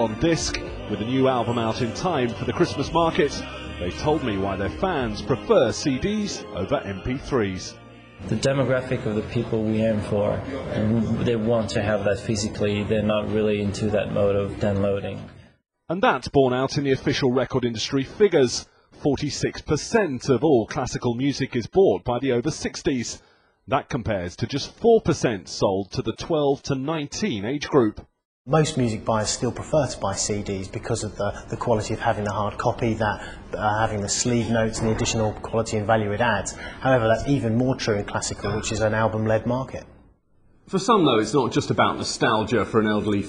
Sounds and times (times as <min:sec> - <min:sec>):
Speech: 0:00.0 - 0:15.3, 0:15.9 - 0:39.9, 0:40.7 - 0:43.2
Music: 0:00.0 - 0:15.6, 0:28.6 - 0:39.6.